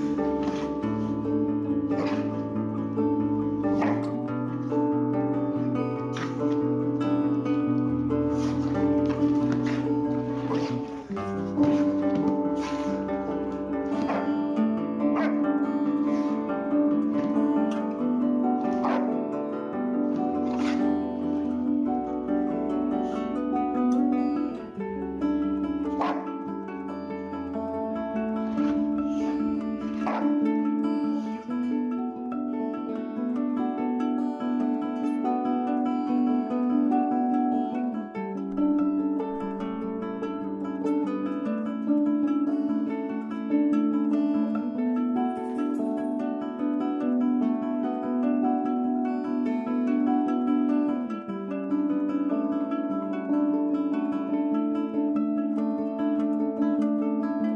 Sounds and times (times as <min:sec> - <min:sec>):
Music: 0:00.0 - 0:57.5
Bow-wow: 0:01.6 - 0:02.6, 0:03.6 - 0:04.3, 0:09.2 - 0:17.9, 0:18.6 - 0:19.4, 0:20.3 - 0:20.8, 0:25.8 - 0:26.5, 0:28.5 - 0:31.4.